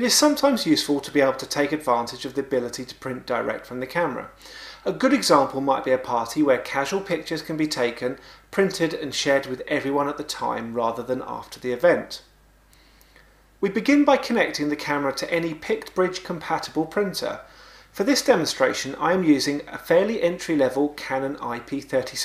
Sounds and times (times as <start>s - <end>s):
Speech: 0.0s - 12.3s, 13.6s - 22.2s.